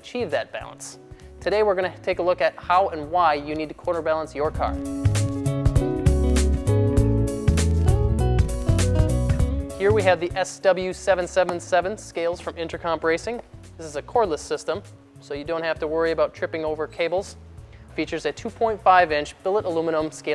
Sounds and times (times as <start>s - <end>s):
Speech: 0.0s - 4.8s, 9.8s - 17.4s, 18.0s - 20.3s
Music: 0.0s - 20.3s.